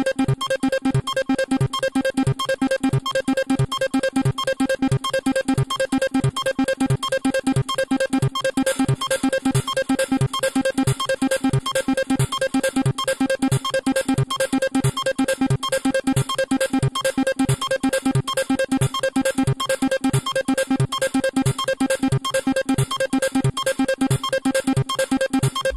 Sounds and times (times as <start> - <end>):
Electronic music: 12.0 - 25.7.